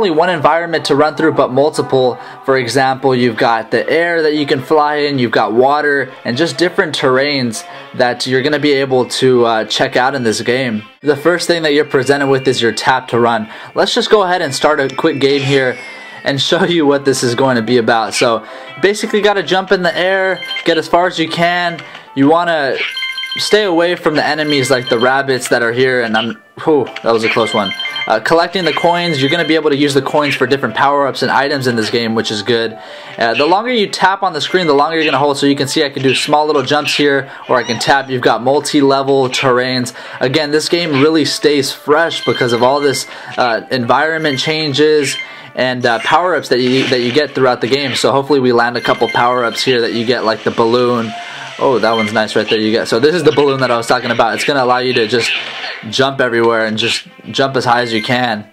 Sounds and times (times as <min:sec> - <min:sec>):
Speech: 0:00.0 - 0:58.5.